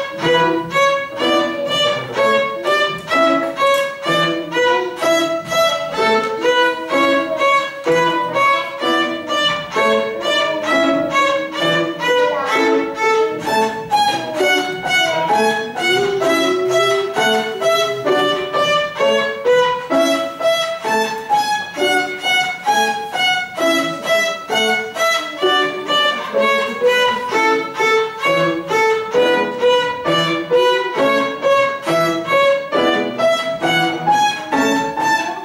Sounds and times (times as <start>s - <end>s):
Violin, fiddle: 0.0s - 35.4s
Speech: 0.4s - 3.2s, 4.1s - 19.3s, 22.7s - 31.5s, 33.6s - 35.4s.